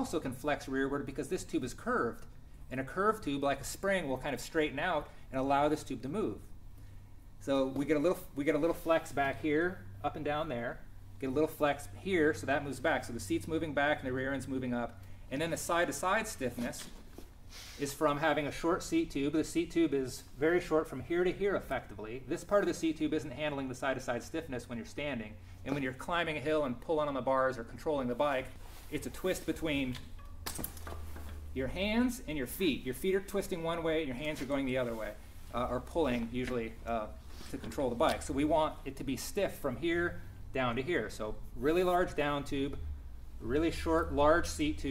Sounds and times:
Speech: 0.0 - 6.5, 7.4 - 17.0, 17.8 - 30.0, 31.6 - 42.8, 43.4 - 44.9.

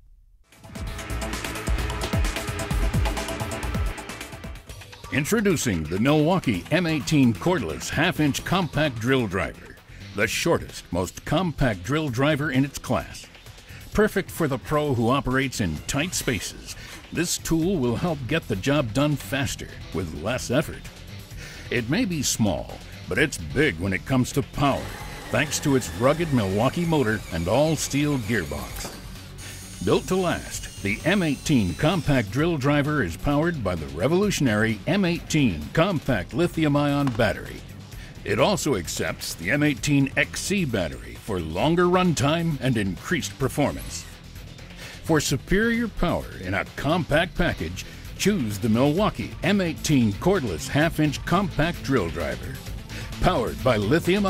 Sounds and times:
Speech: 5.1 - 13.3, 13.9 - 20.8, 21.7 - 28.9, 29.8 - 37.6, 38.2 - 44.1, 45.0 - 52.6, 53.2 - 54.3
Tools: 28.7 - 29.0.

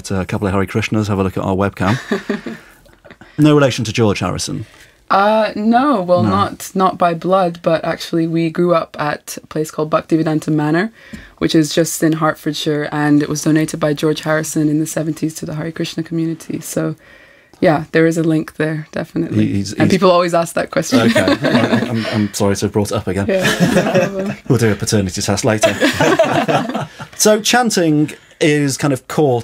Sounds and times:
Speech: 0.0 - 2.0, 3.4 - 17.0, 17.6 - 25.8, 27.2 - 29.4.

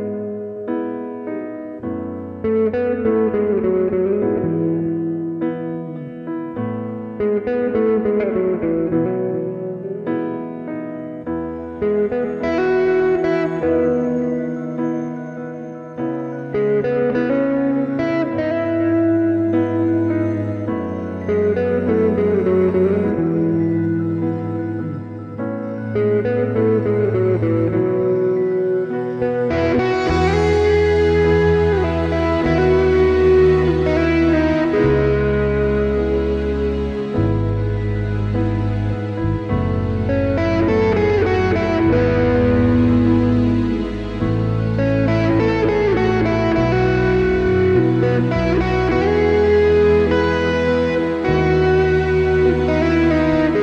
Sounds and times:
Electric guitar: 0.0 - 53.6
Strum: 16.5 - 53.6.

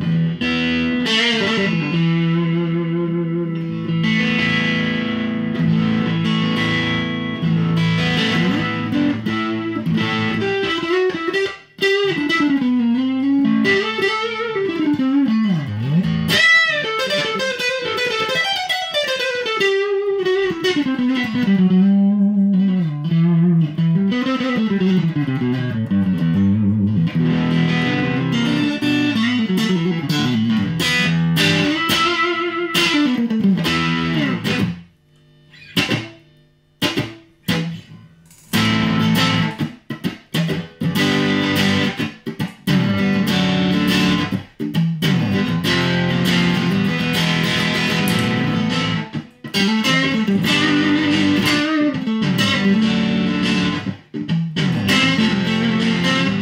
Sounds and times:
Electric guitar: 0.0 - 56.4
Tapping (guitar technique): 0.0 - 56.4.

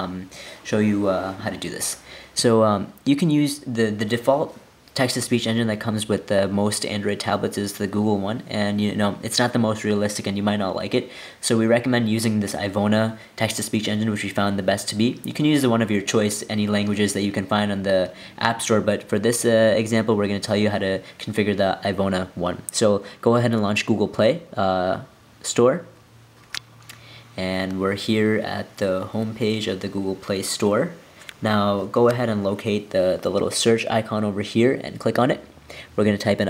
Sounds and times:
Speech: 0.0 - 26.0, 27.4 - 36.5.

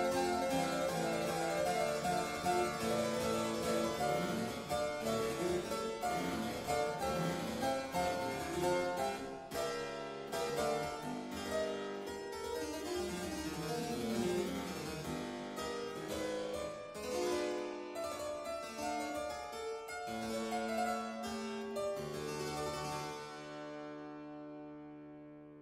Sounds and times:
Harpsichord: 0.0 - 25.6.

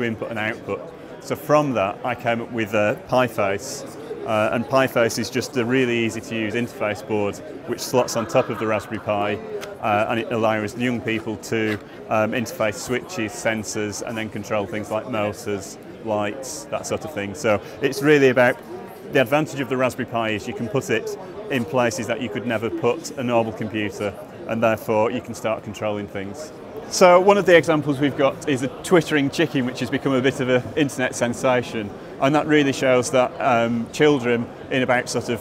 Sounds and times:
Speech: 0.0 - 35.4.

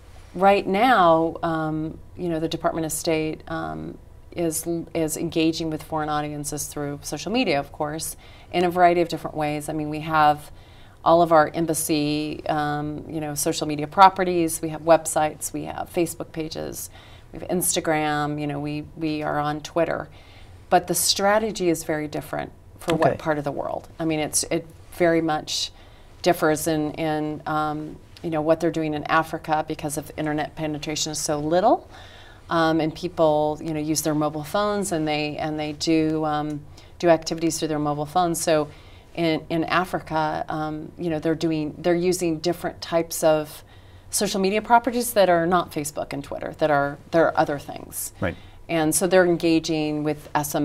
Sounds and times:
Inside, small room: 0.0 - 50.6
Speech: 11.1 - 20.1, 20.8 - 25.7, 44.2 - 50.6.

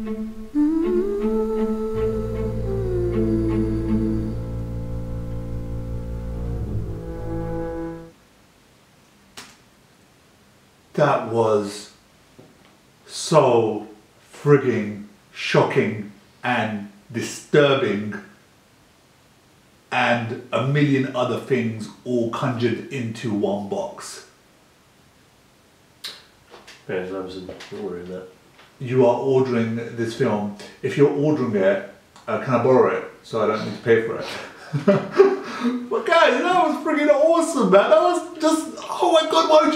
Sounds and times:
Speech: 11.0 - 12.0, 13.1 - 18.3, 19.9 - 24.4, 26.9 - 35.0, 35.7 - 39.7.

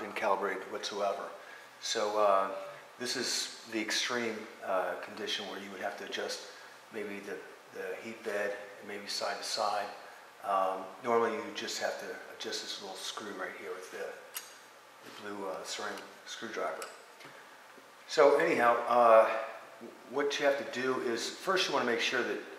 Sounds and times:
Speech: 0.0 - 14.3, 15.1 - 16.9, 18.1 - 22.5.

